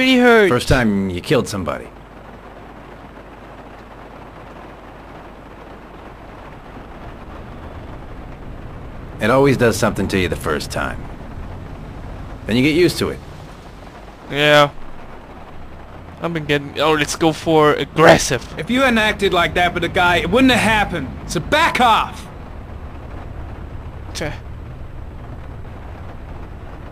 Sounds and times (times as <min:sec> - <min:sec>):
Rain on surface: 0:00.0 - 0:26.9.